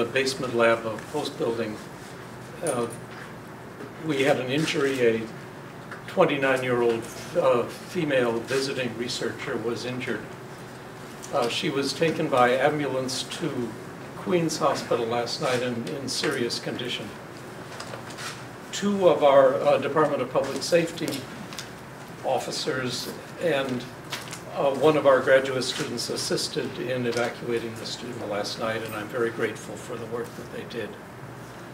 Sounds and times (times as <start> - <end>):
Speech: 0.0 - 1.9, 2.5 - 3.0, 4.0 - 5.4, 6.1 - 10.3, 11.3 - 17.2, 18.7 - 21.3, 22.2 - 31.0.